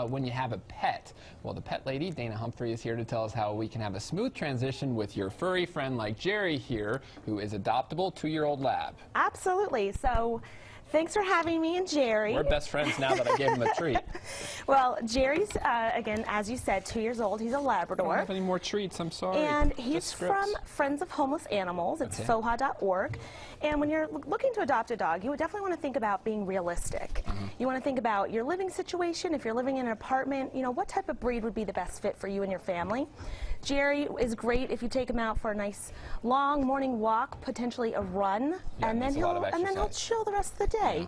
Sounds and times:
Speech: 0:19.0 - 0:20.6, 0:38.8 - 0:39.9.

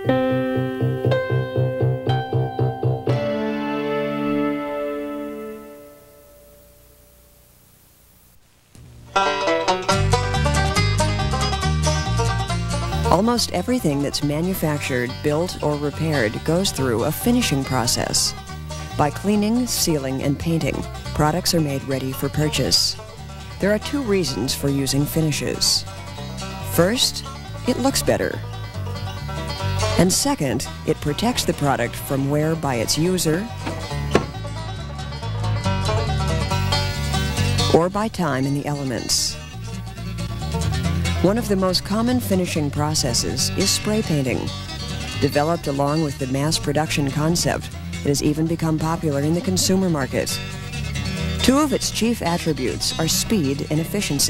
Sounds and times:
Music: 0:00.0 - 0:07.5, 0:08.8 - 0:54.2
Speech: 0:13.1 - 0:23.0, 0:23.6 - 0:25.9, 0:26.6 - 0:28.4, 0:30.0 - 0:33.6, 0:37.7 - 0:39.5, 0:41.2 - 0:44.5, 0:45.2 - 0:50.4, 0:51.4 - 0:54.2.

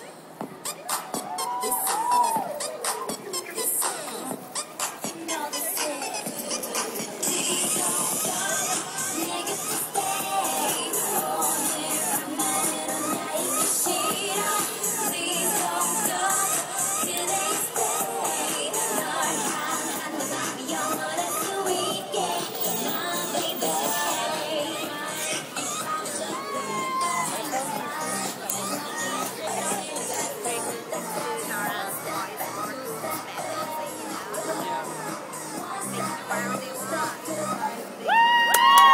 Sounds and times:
Pop music: 0:00.0 - 0:38.9.

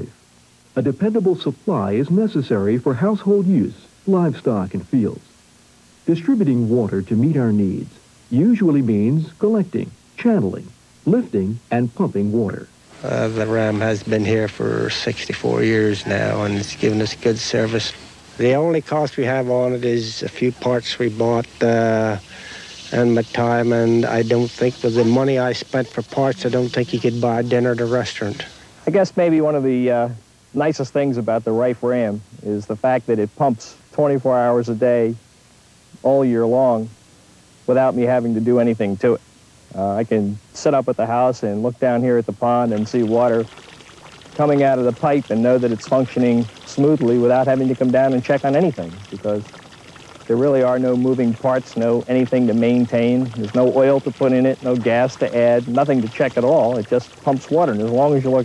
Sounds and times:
Speech: 0:00.8 - 0:05.3, 0:06.0 - 0:22.3, 0:22.9 - 0:35.2, 0:36.0 - 0:37.0, 0:37.7 - 0:43.5, 0:44.4 - 0:49.5, 0:50.3 - 0:58.4.

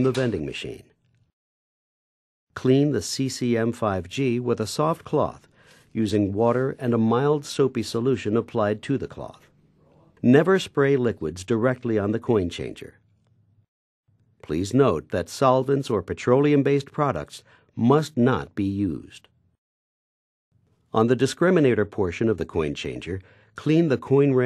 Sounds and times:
Speech: 0:00.0 - 0:01.0, 0:02.6 - 0:13.0, 0:14.4 - 0:19.3, 0:20.9 - 0:24.4.

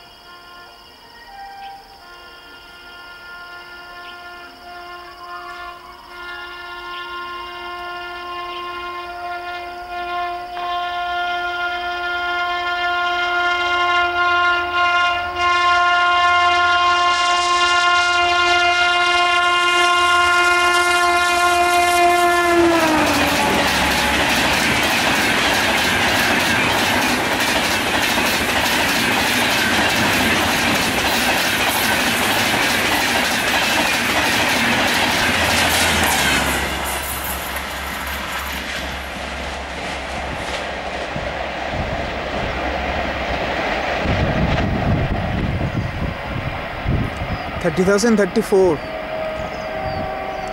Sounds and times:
Railroad car, train wagon: 0:00.0 - 0:50.5
Train: 0:00.0 - 0:50.5.

